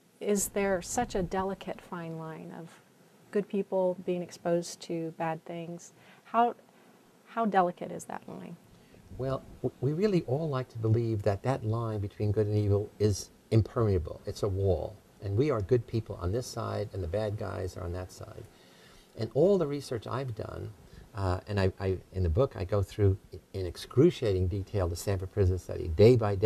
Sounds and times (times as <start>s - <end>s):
Inside, small room: 0.0s - 26.4s
Speech: 0.2s - 6.6s, 7.3s - 8.6s, 9.2s - 18.5s, 19.2s - 26.4s.